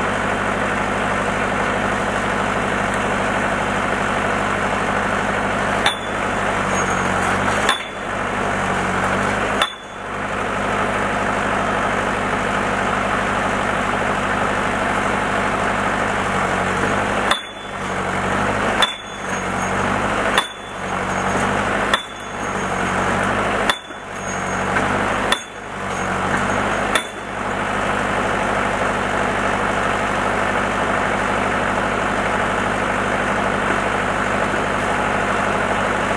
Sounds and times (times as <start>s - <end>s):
Outside, rural or natural: 0.0s - 36.1s.